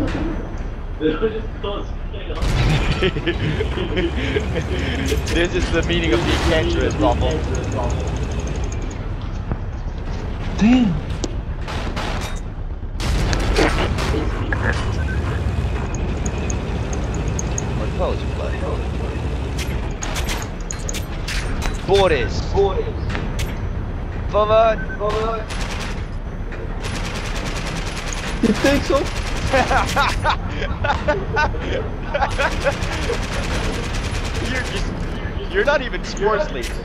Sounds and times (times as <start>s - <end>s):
Artillery fire: 2.4s - 3.2s, 11.7s - 12.3s, 13.0s - 14.4s, 26.8s - 30.2s.